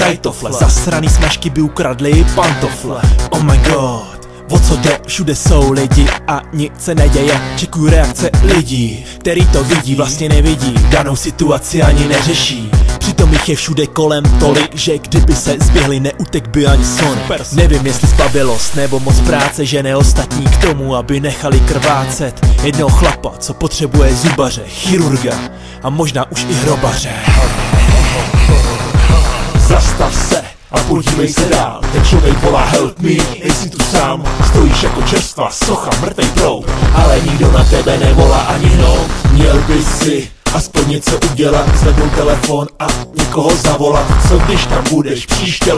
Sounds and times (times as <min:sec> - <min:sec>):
Electronic music: 0:00.0 - 0:45.7
Hip hop music: 0:00.0 - 0:45.7
Rapping: 0:00.0 - 0:45.7.